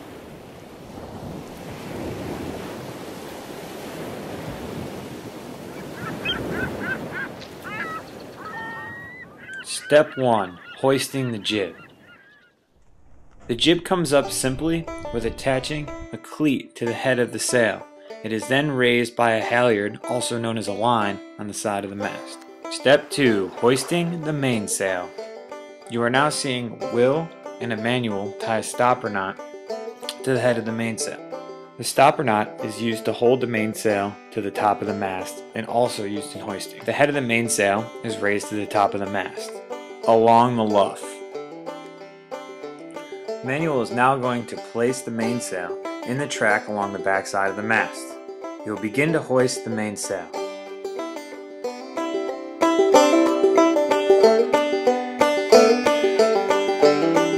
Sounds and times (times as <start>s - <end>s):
Speech: 9.7s - 11.8s, 13.5s - 25.1s, 25.9s - 29.4s, 30.1s - 31.2s, 31.8s - 41.2s, 43.4s - 50.4s
Music: 12.9s - 57.3s.